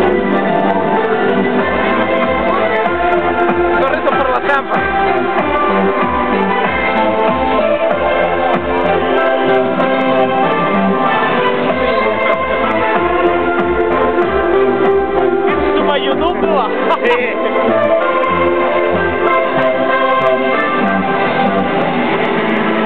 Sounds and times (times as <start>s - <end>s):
Music: 0.0s - 22.8s
Speech: 3.8s - 4.8s, 15.7s - 17.6s.